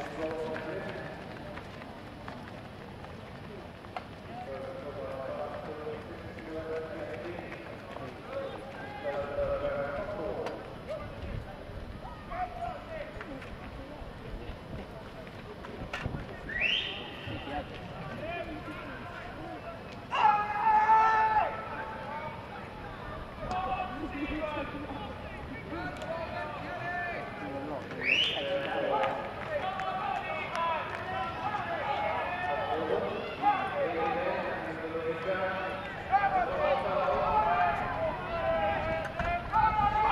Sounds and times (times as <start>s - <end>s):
Speech: 0.0s - 1.8s, 4.3s - 40.1s
Run: 0.0s - 40.1s.